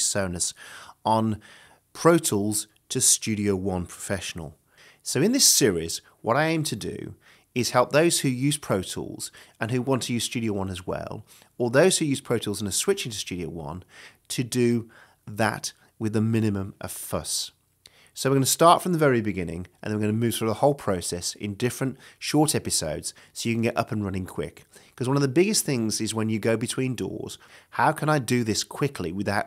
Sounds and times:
Speech: 0:00.0 - 0:01.4, 0:02.0 - 0:17.6, 0:18.2 - 0:29.4.

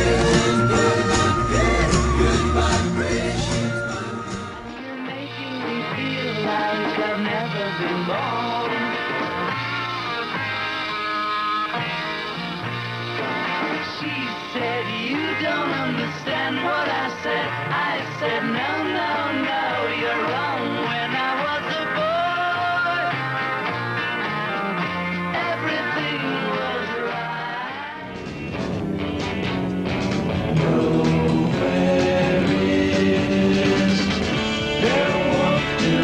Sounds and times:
Singing: 0:00.0 - 0:09.3, 0:13.8 - 0:23.3, 0:25.3 - 0:28.1, 0:30.6 - 0:36.0
Psychedelic rock: 0:00.0 - 0:36.0.

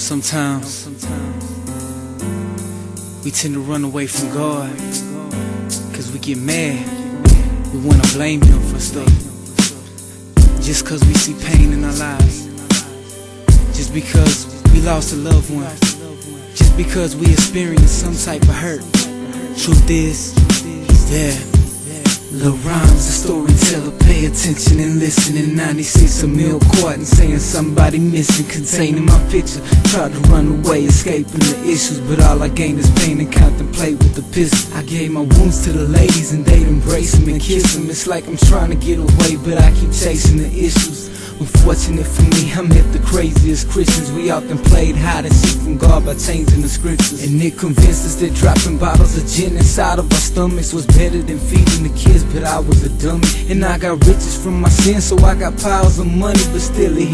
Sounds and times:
Music: 0:00.0 - 0:57.1.

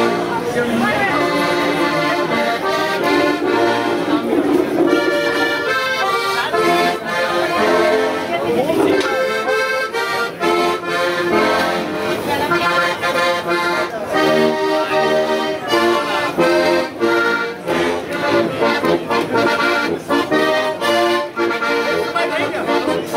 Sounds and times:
Speech: 0:00.0 - 0:04.8, 0:05.6 - 0:10.7, 0:11.4 - 0:16.8, 0:21.5 - 0:23.1
Music: 0:00.0 - 0:23.1.

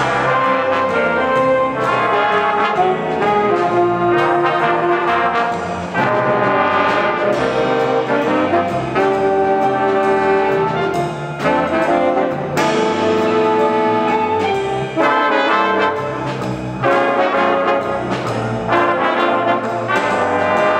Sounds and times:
Trombone: 0:00.0 - 0:20.7
Trumpet: 0:00.0 - 0:20.7.

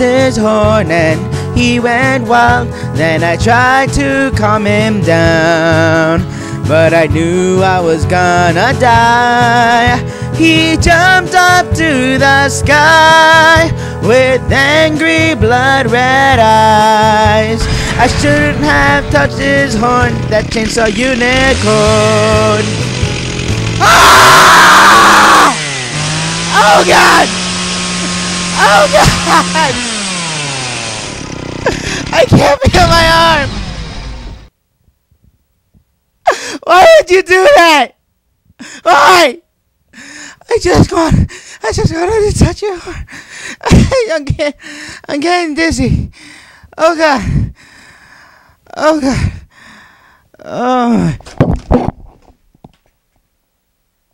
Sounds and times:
Speech: 0:32.1 - 0:33.5, 0:36.6 - 0:38.0, 0:38.8 - 0:39.4, 0:40.4 - 0:43.0, 0:43.7 - 0:46.0, 0:46.8 - 0:47.3, 0:48.7 - 0:49.2, 0:50.4 - 0:51.2.

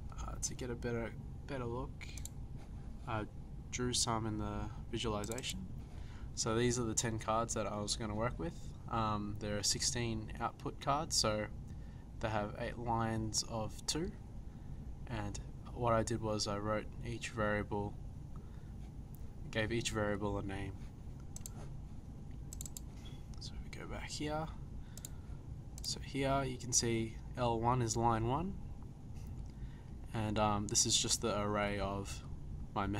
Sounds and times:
Speech: 0:00.1 - 0:02.2, 0:03.1 - 0:05.6, 0:06.4 - 0:11.5, 0:12.2 - 0:14.2, 0:15.1 - 0:18.0, 0:19.5 - 0:20.8, 0:23.4 - 0:24.6, 0:25.8 - 0:28.6, 0:30.1 - 0:32.9.

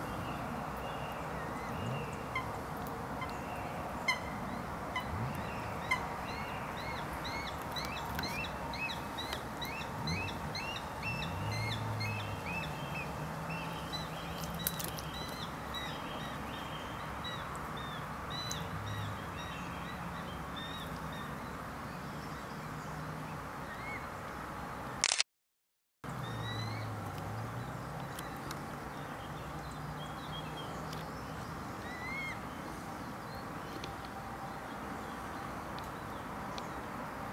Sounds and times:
Outside, rural or natural: 0:00.0 - 0:25.3, 0:26.0 - 0:37.3.

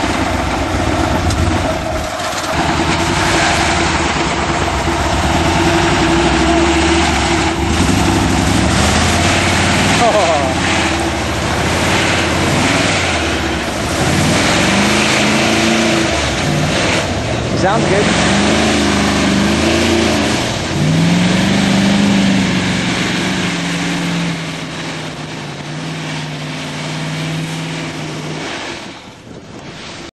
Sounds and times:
Vehicle: 0:00.0 - 0:30.1.

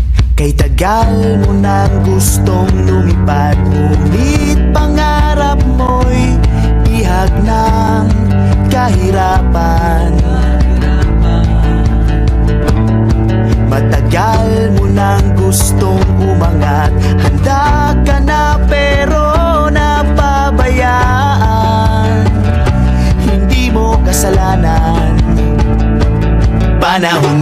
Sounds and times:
Background music: 0:00.0 - 0:27.4
Happy music: 0:00.4 - 0:27.4.

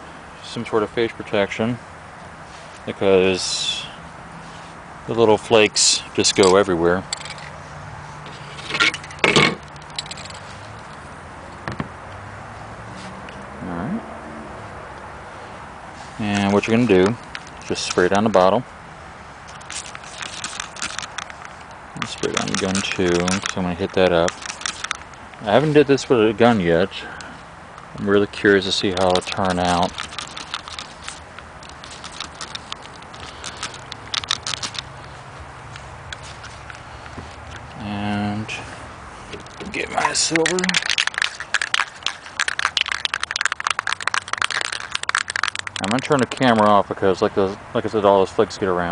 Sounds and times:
Speech: 0:00.4 - 0:01.8, 0:02.9 - 0:04.0, 0:05.1 - 0:07.1, 0:13.6 - 0:14.0, 0:16.2 - 0:18.7, 0:25.4 - 0:27.1, 0:28.0 - 0:29.9, 0:37.8 - 0:38.7, 0:39.6 - 0:40.8, 0:45.8 - 0:48.9.

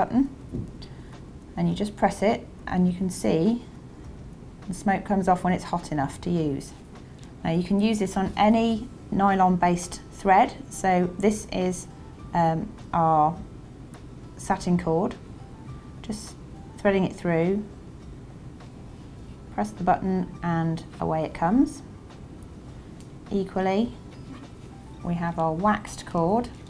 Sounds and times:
Speech: 0:00.0 - 0:00.4, 0:01.6 - 0:03.7, 0:04.7 - 0:06.8, 0:07.4 - 0:13.4, 0:14.4 - 0:15.2, 0:16.0 - 0:17.7, 0:19.6 - 0:21.9, 0:23.3 - 0:24.0, 0:25.0 - 0:26.6
Music: 0:04.6 - 0:26.7.

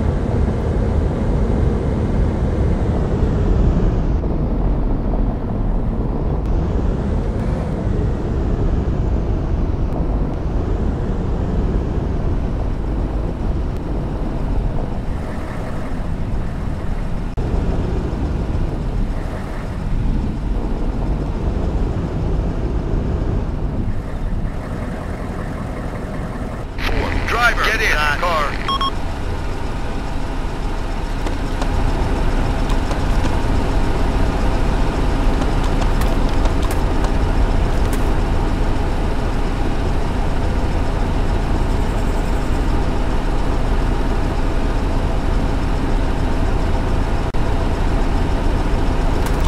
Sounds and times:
Car: 0:00.0 - 0:49.4
Speech: 0:26.8 - 0:28.7.

